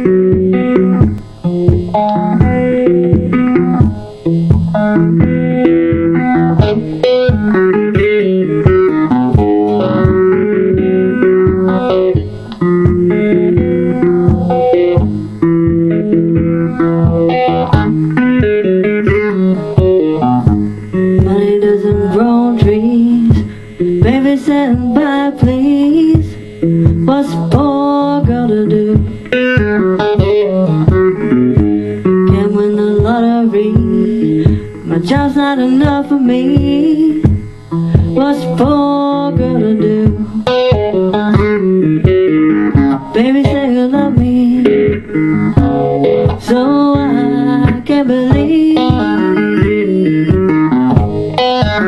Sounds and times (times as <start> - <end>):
Electric guitar: 0.0 - 51.8.